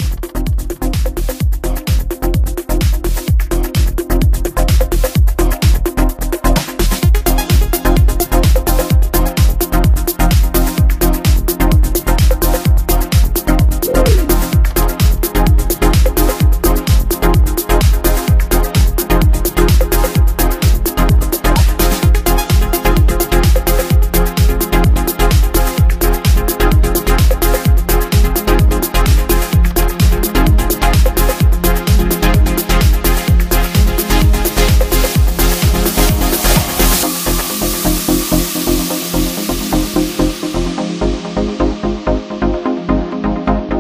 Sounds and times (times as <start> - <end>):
Bass drum: 0.0 - 42.1.